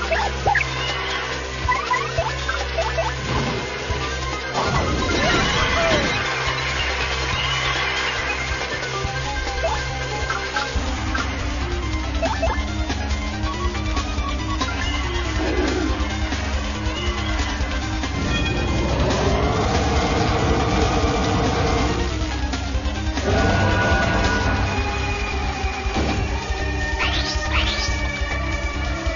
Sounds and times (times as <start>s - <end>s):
Music: 0.0s - 29.1s.